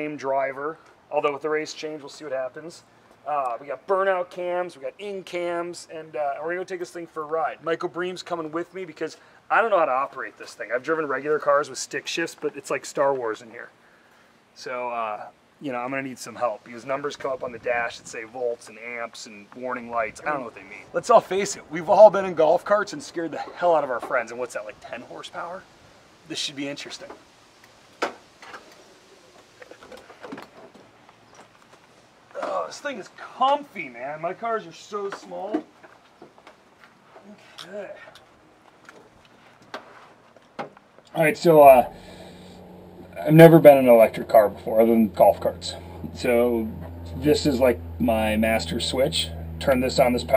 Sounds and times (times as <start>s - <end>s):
Speech: 0.0s - 13.7s, 14.6s - 25.6s, 26.3s - 27.2s, 32.4s - 35.7s, 37.2s - 38.1s, 41.1s - 42.0s, 43.1s - 50.3s.